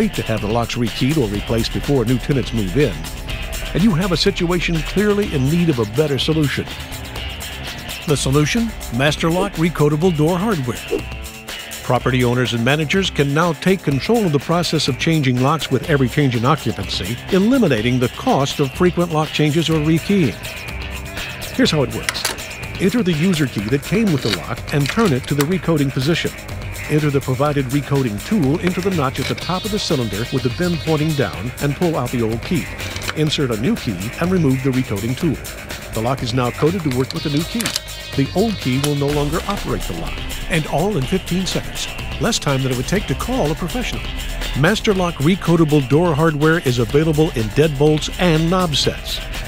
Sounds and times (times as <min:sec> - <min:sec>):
Speech: 0:00.0 - 0:03.1, 0:03.7 - 0:06.8, 0:08.0 - 0:11.1, 0:11.8 - 0:20.4, 0:21.5 - 0:35.4, 0:36.0 - 0:49.3
Music: 0:00.0 - 0:49.4.